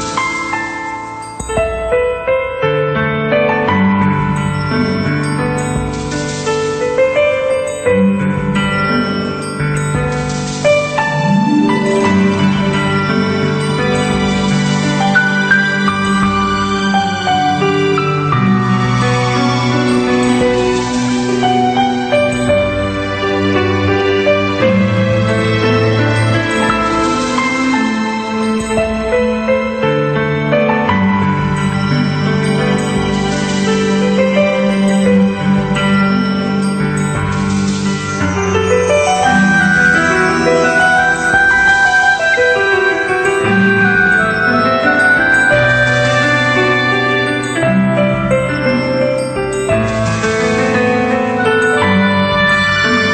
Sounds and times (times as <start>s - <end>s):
Music: 0.0s - 53.1s.